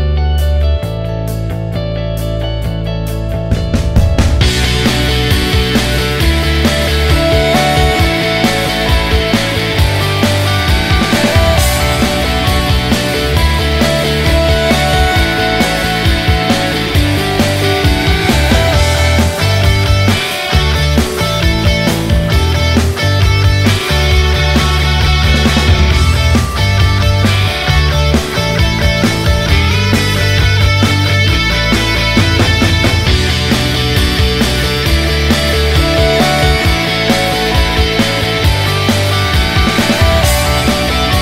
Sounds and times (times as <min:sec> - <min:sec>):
Music: 0:00.0 - 0:41.2.